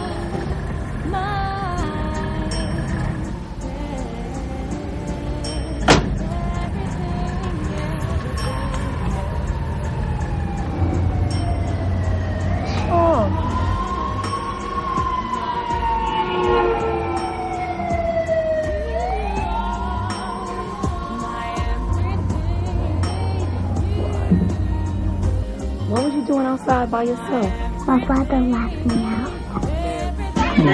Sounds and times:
Music: 0:00.0 - 0:30.7
Police car (siren): 0:08.8 - 0:21.4.

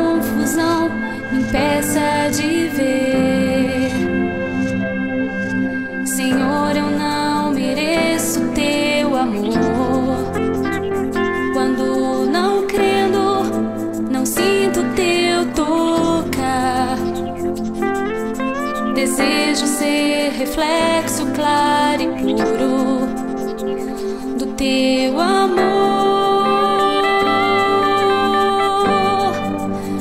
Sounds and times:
Music: 0:00.0 - 0:30.0.

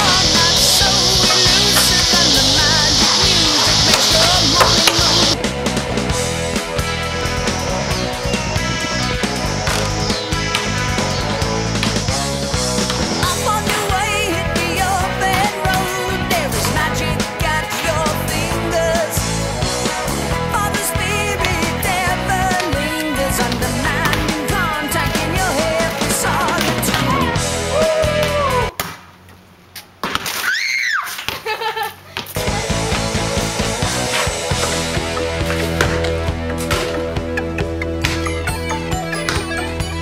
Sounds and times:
Progressive rock: 0:00.0 - 0:28.7, 0:32.4 - 0:40.0.

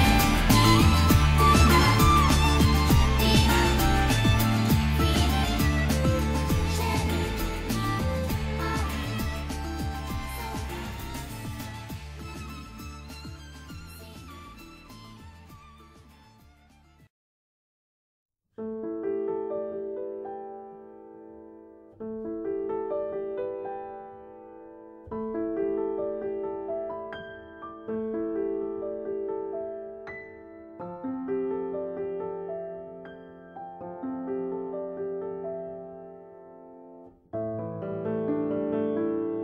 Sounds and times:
Piano: 0:00.0 - 0:17.1, 0:18.6 - 0:39.4.

